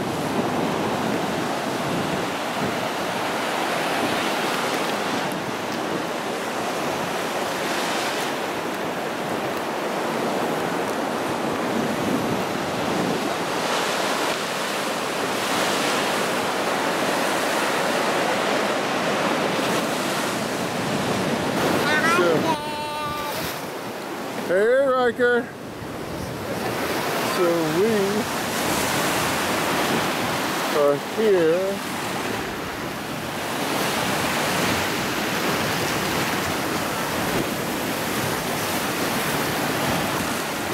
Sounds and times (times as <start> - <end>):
Waves, surf: 0.0 - 40.7.